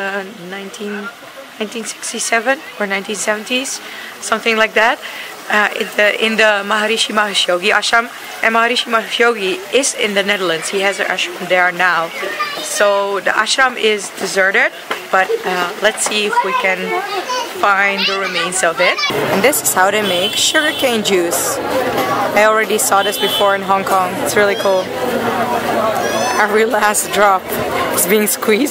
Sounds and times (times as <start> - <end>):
Speech: 0.0 - 21.6, 22.2 - 28.7
Children playing: 7.4 - 28.7.